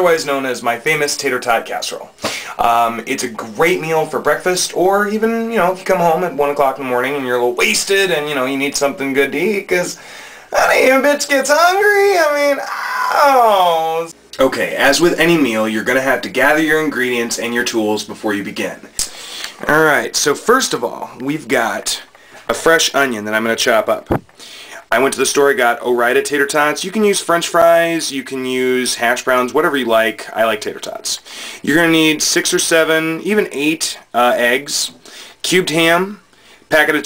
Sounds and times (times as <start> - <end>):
Speech: 0.0 - 18.9, 19.6 - 24.2, 24.8 - 37.0.